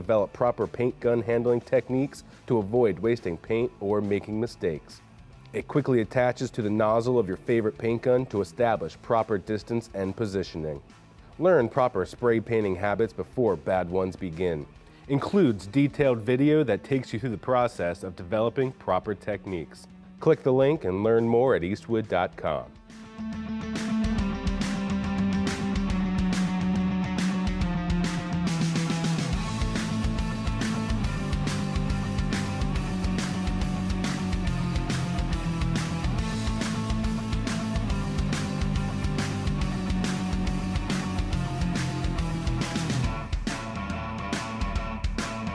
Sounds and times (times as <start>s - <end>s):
Speech: 0.0s - 10.8s, 11.4s - 22.8s
Music: 0.0s - 45.5s.